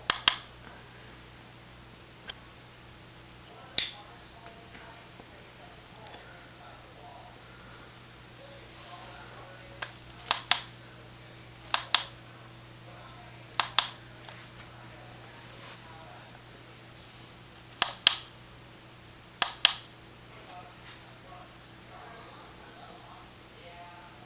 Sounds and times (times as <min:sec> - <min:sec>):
Speech: 0:03.4 - 0:07.8, 0:08.4 - 0:16.6, 0:20.3 - 0:24.2.